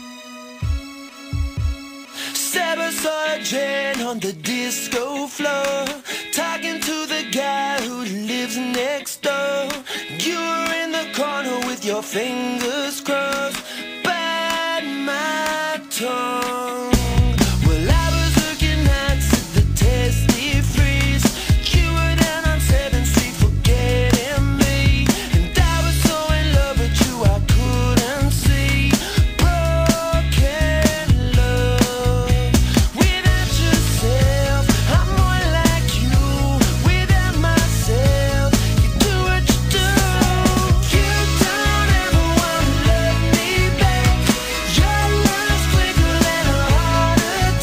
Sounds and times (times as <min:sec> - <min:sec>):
Music: 0:00.0 - 0:47.6.